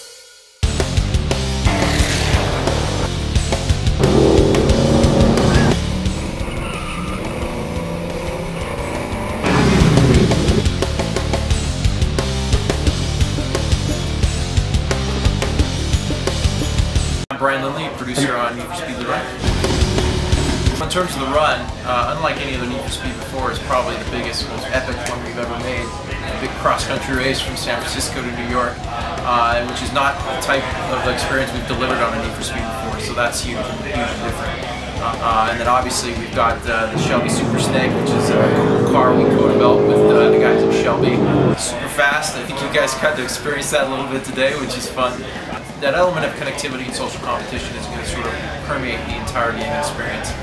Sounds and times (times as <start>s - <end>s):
Music: 0.0s - 50.4s
Speech: 17.3s - 19.5s, 20.6s - 50.4s.